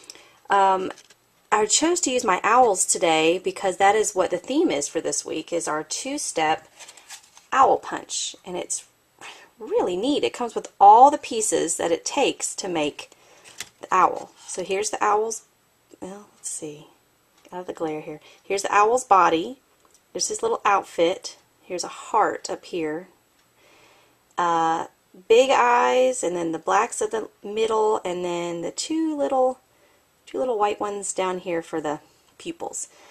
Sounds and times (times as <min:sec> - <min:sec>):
Speech: 0:00.5 - 0:06.6, 0:07.6 - 0:08.9, 0:09.6 - 0:13.1, 0:13.8 - 0:19.6, 0:20.2 - 0:23.2, 0:24.4 - 0:29.6, 0:30.3 - 0:32.9.